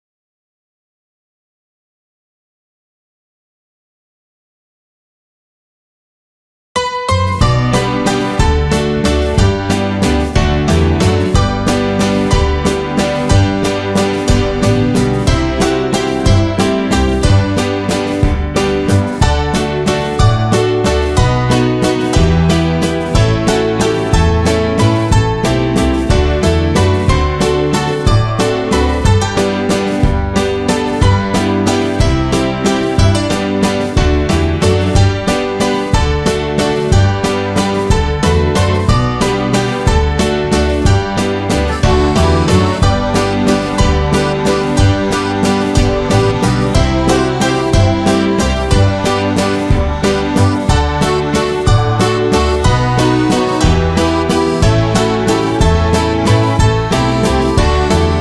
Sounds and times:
Music: 6.8 - 58.2.

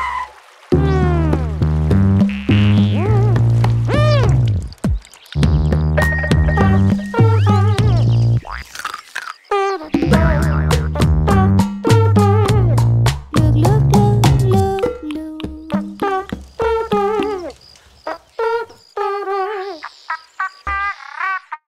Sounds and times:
Music: 0.8 - 4.7, 5.4 - 8.4, 9.9 - 17.3.

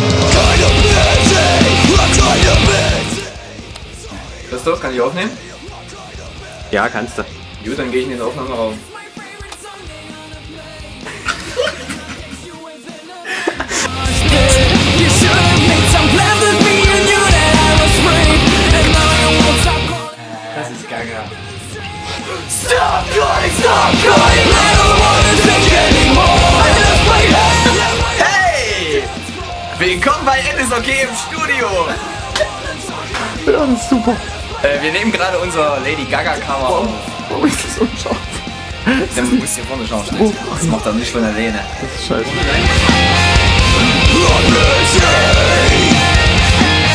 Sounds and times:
Music: 0.0 - 46.9
Speech: 4.5 - 5.4, 6.7 - 9.0, 20.5 - 21.4, 29.8 - 42.7.

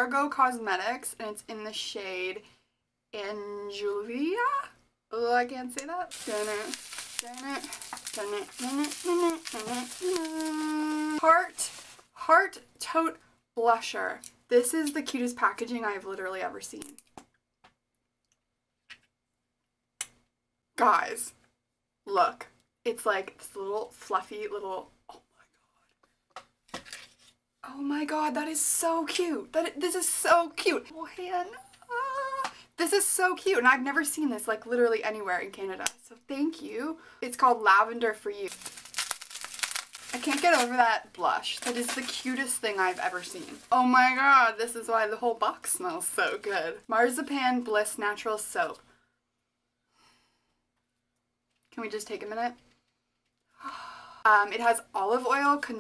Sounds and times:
Speech: 0.0 - 2.4, 3.2 - 16.9, 20.8 - 21.4, 22.1 - 24.9, 27.6 - 38.6, 40.2 - 48.8, 51.8 - 52.6, 54.3 - 55.8
Inside, small room: 0.0 - 55.8.

